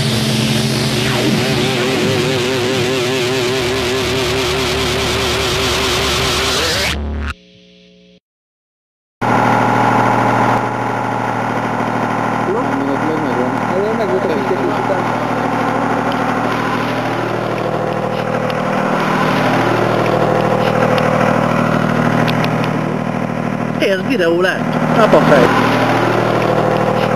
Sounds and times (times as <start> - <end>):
Engine: 0.0 - 6.6, 9.2 - 27.1
Vehicle: 9.2 - 27.1
Speech: 12.5 - 15.5, 23.8 - 25.6.